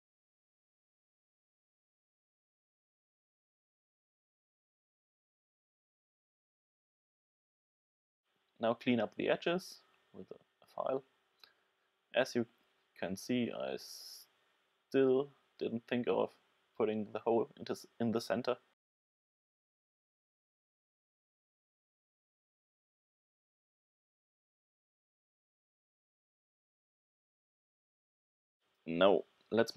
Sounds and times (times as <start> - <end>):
Inside, small room: 8.3 - 18.8, 28.6 - 29.7
Speech: 8.6 - 11.1, 12.2 - 14.3, 15.0 - 18.7, 28.9 - 29.7.